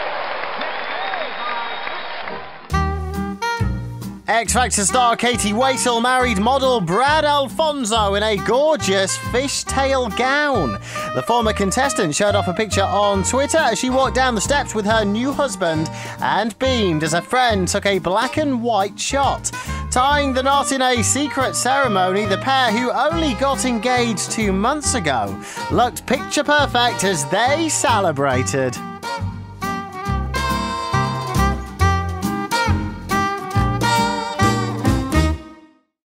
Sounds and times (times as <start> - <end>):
Music: 2.6 - 36.0
Speech: 4.3 - 28.8.